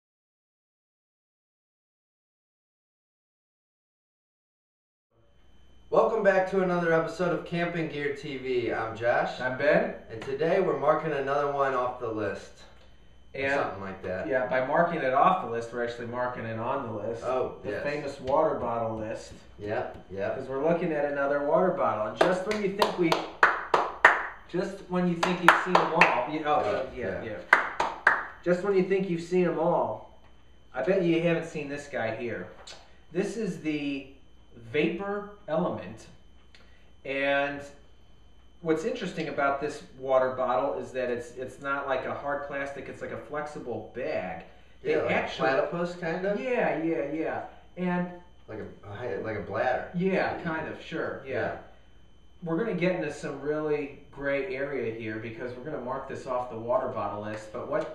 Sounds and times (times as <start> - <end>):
Speech: 5.9 - 12.7, 13.4 - 23.2, 24.5 - 27.5, 28.4 - 30.1, 30.8 - 32.6, 33.2 - 36.2, 37.0 - 37.8, 38.6 - 51.7, 52.4 - 57.9.